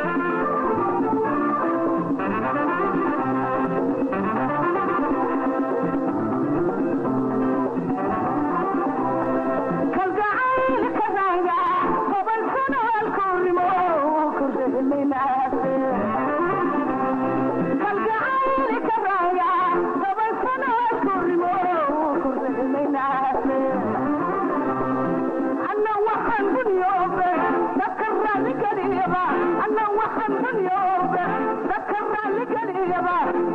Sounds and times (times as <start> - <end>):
Music: 0.0 - 33.5.